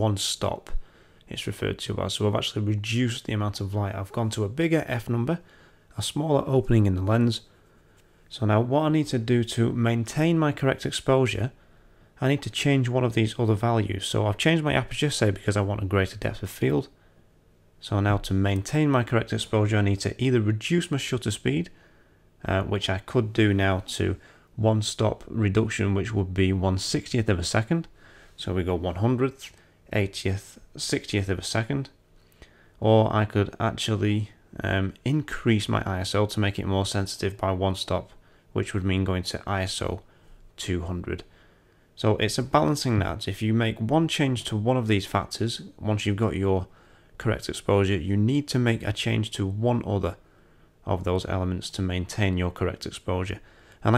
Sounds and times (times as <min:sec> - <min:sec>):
Speech: 0:00.0 - 0:07.5, 0:08.3 - 0:11.6, 0:12.2 - 0:17.0, 0:17.8 - 0:21.8, 0:22.4 - 0:32.0, 0:32.8 - 0:41.3, 0:42.0 - 0:50.2, 0:50.8 - 0:53.9.